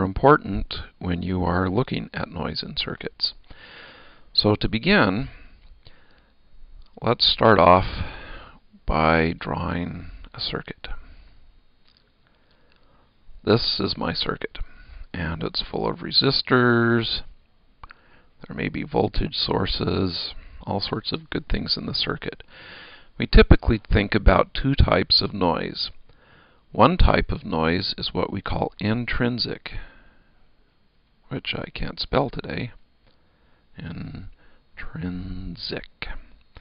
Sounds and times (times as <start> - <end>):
Speech: 0.0 - 3.4, 4.4 - 5.4, 7.0 - 8.1, 8.8 - 11.0, 13.4 - 17.4, 18.4 - 22.4, 23.2 - 26.0, 26.7 - 29.9, 31.3 - 32.8, 33.8 - 36.3.